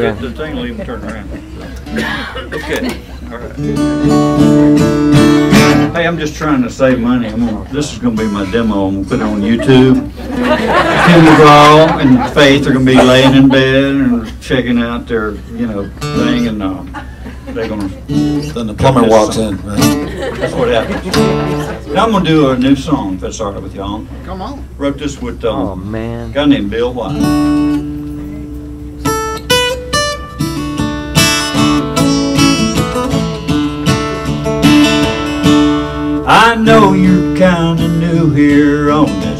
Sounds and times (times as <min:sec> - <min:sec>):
Music: 0:03.6 - 0:05.9, 0:27.1 - 0:39.3.